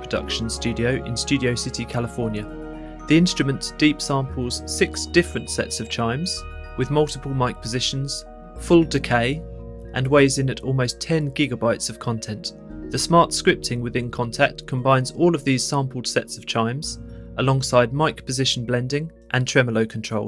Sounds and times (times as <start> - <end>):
Chime: 0.1 - 10.4.